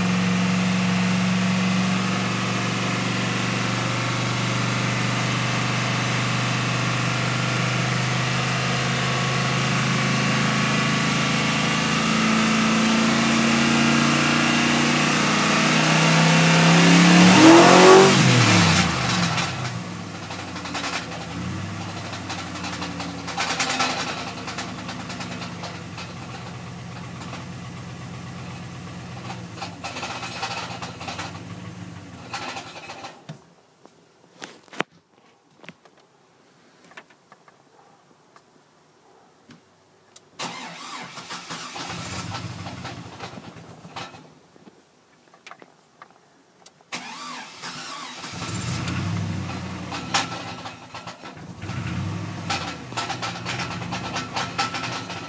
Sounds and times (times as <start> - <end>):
Car: 0.0 - 33.2, 40.4 - 44.3, 46.9 - 55.2
Medium engine (mid frequency): 0.0 - 33.2, 40.4 - 44.3, 46.9 - 55.2.